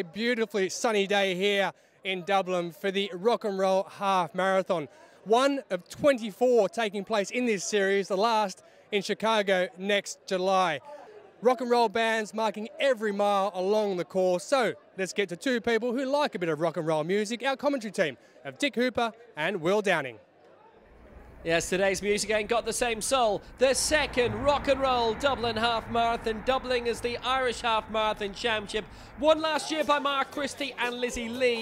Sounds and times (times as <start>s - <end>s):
Speech: 0.0s - 20.2s, 21.4s - 31.6s
Outside, urban or manmade: 0.0s - 31.6s.